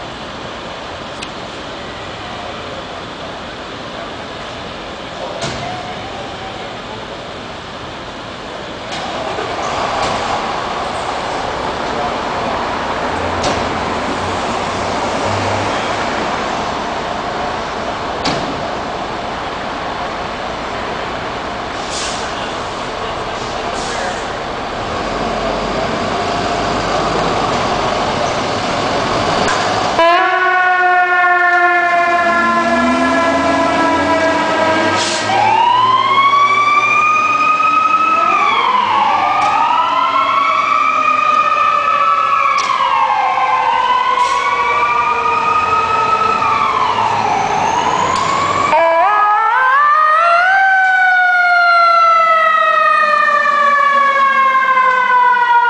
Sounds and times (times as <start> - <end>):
Air brake: 21.8 - 22.4, 23.4 - 24.3, 35.0 - 35.3, 44.2 - 44.5.